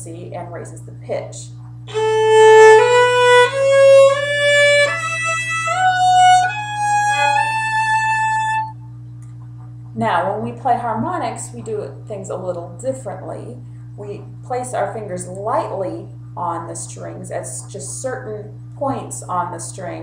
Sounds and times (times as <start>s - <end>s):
Speech: 0.0s - 1.6s, 10.0s - 20.0s
Violin, fiddle: 1.9s - 8.7s.